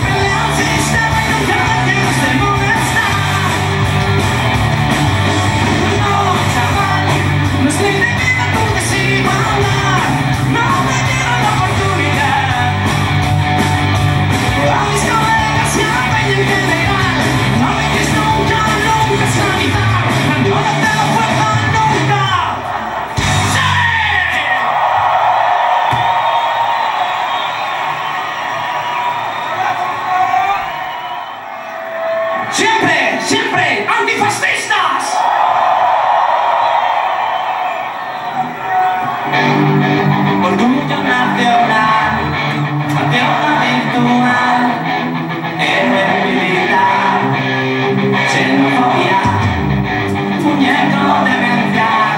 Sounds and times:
Ska: 0.0s - 24.4s, 38.7s - 52.1s.

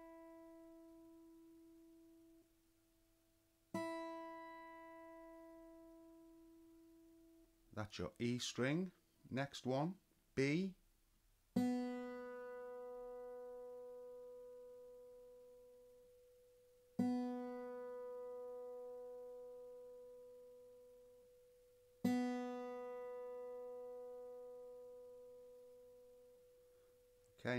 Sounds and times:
Guitar: 0.0s - 2.5s, 3.7s - 9.8s, 11.6s - 27.5s.

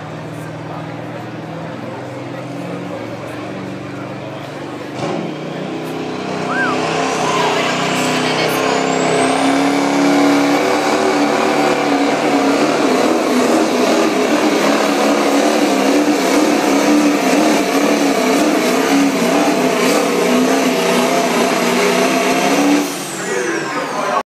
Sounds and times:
Speech: 0.0s - 5.0s, 7.2s - 9.1s, 23.2s - 24.2s.

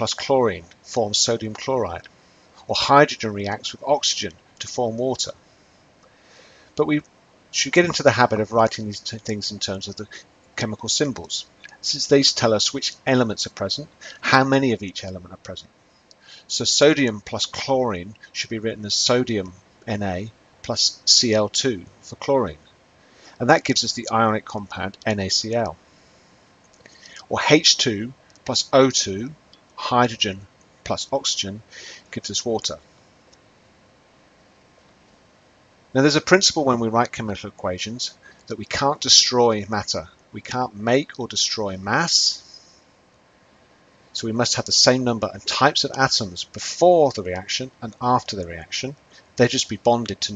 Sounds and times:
Speech: 0.0s - 5.4s, 6.8s - 15.7s, 16.3s - 22.6s, 23.4s - 25.8s, 27.0s - 32.8s, 36.0s - 42.6s, 44.2s - 50.3s.

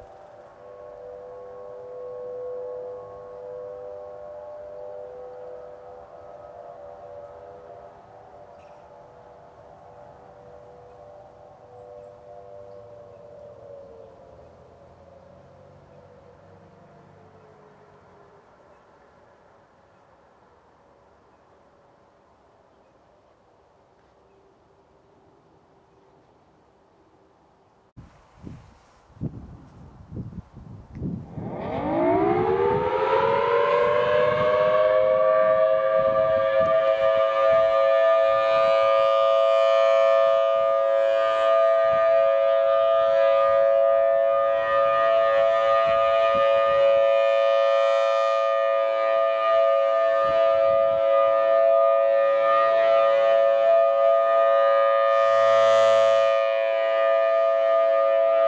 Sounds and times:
Siren: 0.0s - 25.9s, 30.1s - 58.4s.

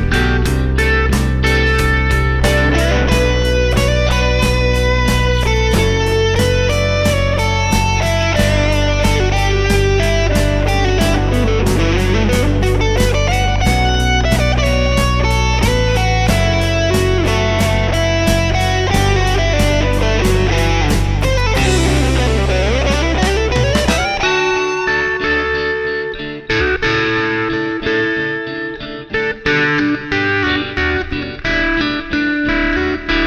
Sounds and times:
Music: 0.0s - 33.2s.

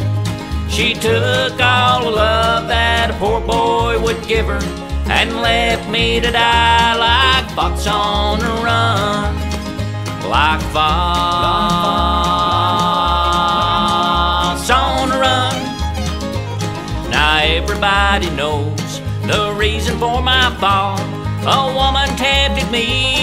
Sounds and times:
Bluegrass: 0.0s - 23.2s.

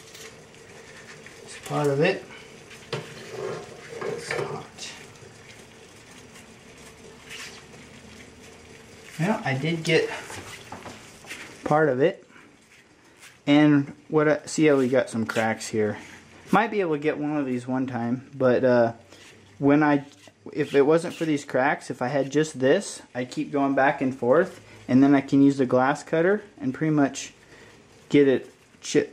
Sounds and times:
Dishes, pots, and pans: 2.9s - 4.6s.

